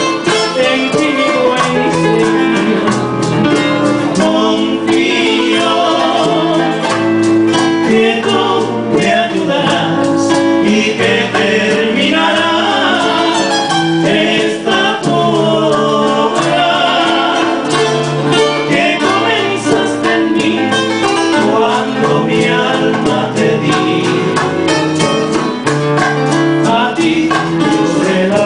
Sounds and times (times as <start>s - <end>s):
Musical instrument: 0.0s - 28.4s
Male singing: 0.1s - 3.1s, 4.1s - 6.8s, 7.8s - 17.6s, 18.7s - 20.8s, 21.4s - 24.4s, 26.6s - 28.4s.